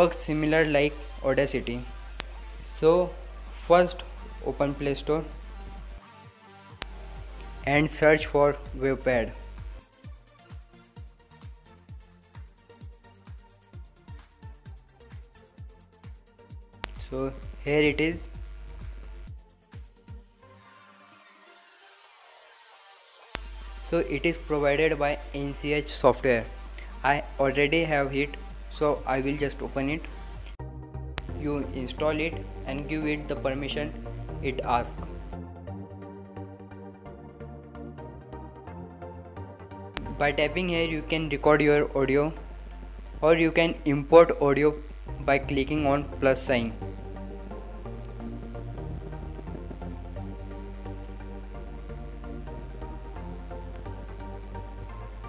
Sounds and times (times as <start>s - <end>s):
Speech: 0.0s - 1.9s, 2.8s - 5.3s, 7.6s - 9.4s, 17.0s - 18.3s, 23.9s - 30.1s, 31.4s - 35.0s, 40.0s - 42.4s, 43.2s - 46.8s
Music: 0.0s - 55.2s.